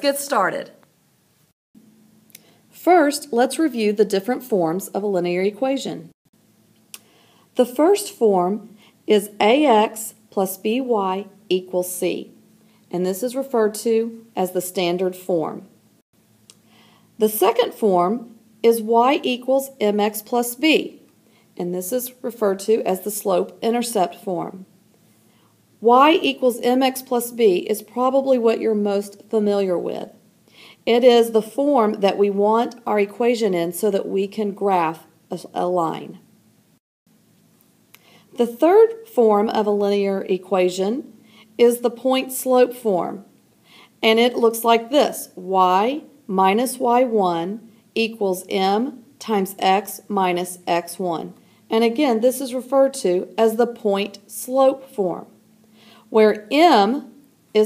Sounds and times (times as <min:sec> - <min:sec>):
Speech: 0:00.0 - 0:00.8, 0:02.8 - 0:06.2, 0:07.6 - 0:15.7, 0:17.2 - 0:21.0, 0:21.6 - 0:24.7, 0:25.8 - 0:30.2, 0:30.8 - 0:36.2, 0:38.4 - 0:43.3, 0:44.0 - 0:55.4, 0:56.1 - 0:57.6.